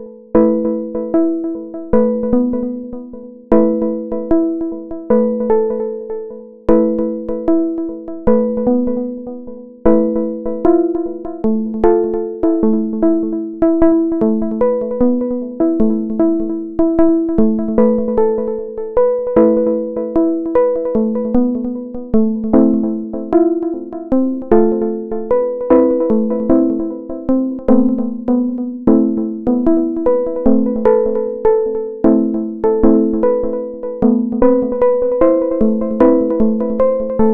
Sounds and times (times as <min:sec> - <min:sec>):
Music: 0:00.0 - 0:37.3.